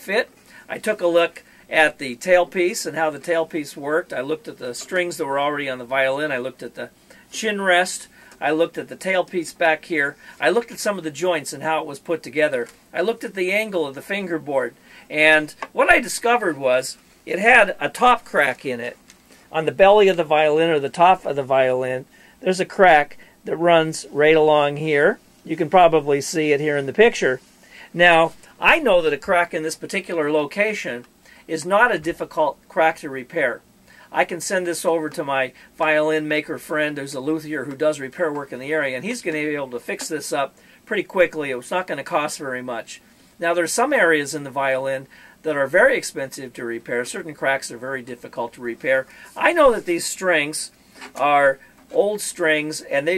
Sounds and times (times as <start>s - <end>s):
Speech: 0.0s - 53.1s.